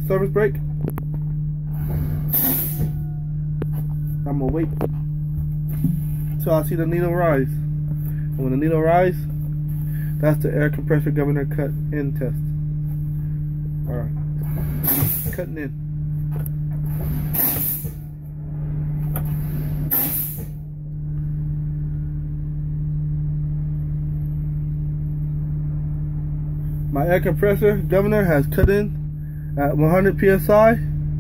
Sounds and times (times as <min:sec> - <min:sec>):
Speech: 0:00.0 - 0:00.6, 0:04.2 - 0:04.8, 0:06.4 - 0:07.7, 0:08.4 - 0:09.3, 0:10.2 - 0:12.5, 0:13.9 - 0:14.2, 0:15.3 - 0:15.8, 0:26.9 - 0:29.0, 0:29.6 - 0:31.0
Vehicle: 0:00.0 - 0:31.2.